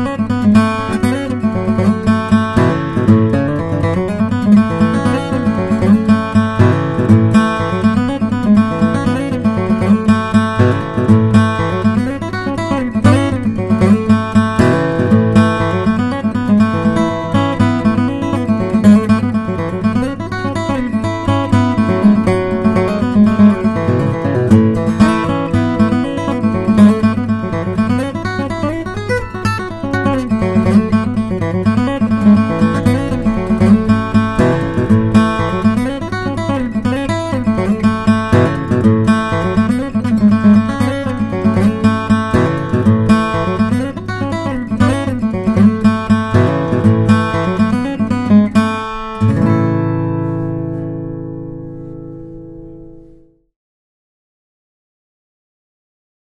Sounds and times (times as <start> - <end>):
Music: 0.0 - 53.5.